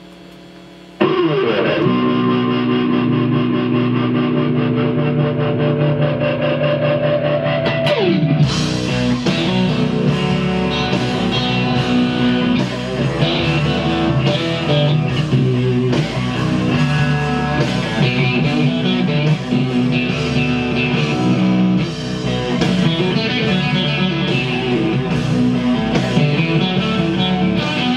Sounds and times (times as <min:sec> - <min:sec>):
Bass guitar: 0:01.0 - 0:27.9.